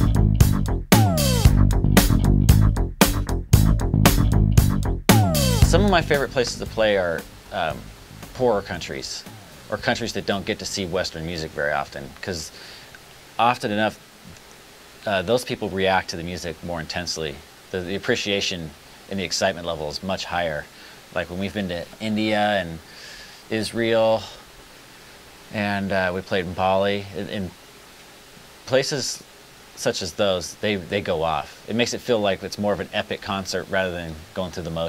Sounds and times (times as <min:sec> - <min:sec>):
Speech: 0:05.7 - 0:12.6, 0:13.4 - 0:14.0, 0:15.0 - 0:22.8, 0:23.5 - 0:24.4, 0:25.5 - 0:27.6, 0:28.7 - 0:34.8.